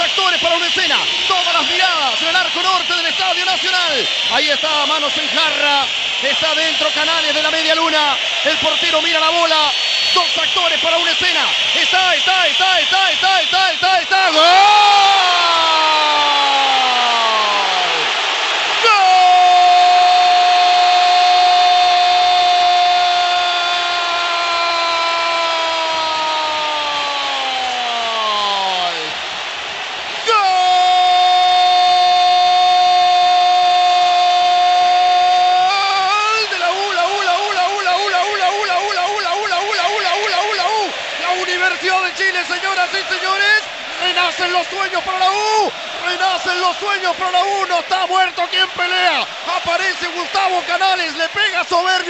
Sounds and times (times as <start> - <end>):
Speech: 0.0 - 17.6, 30.3 - 52.0.